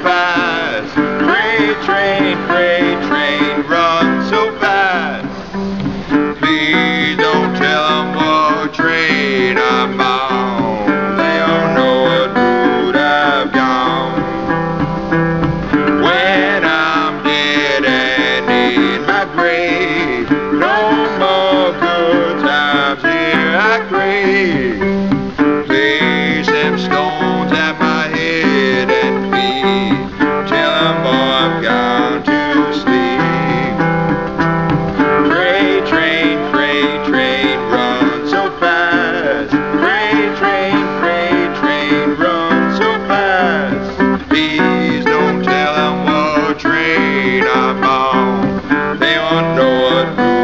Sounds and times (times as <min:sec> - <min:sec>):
Banjo: 0:00.0 - 0:50.4
Bluegrass: 0:00.0 - 0:50.4
Song: 0:00.0 - 0:50.4
Steel guitar, slide guitar: 0:00.0 - 0:50.4.